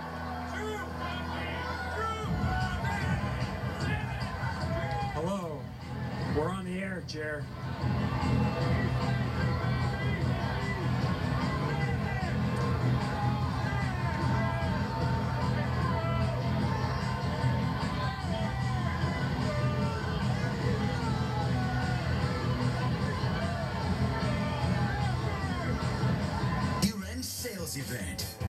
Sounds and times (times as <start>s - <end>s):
Music: 0.0s - 28.4s
Speech: 6.3s - 7.5s, 26.8s - 28.4s.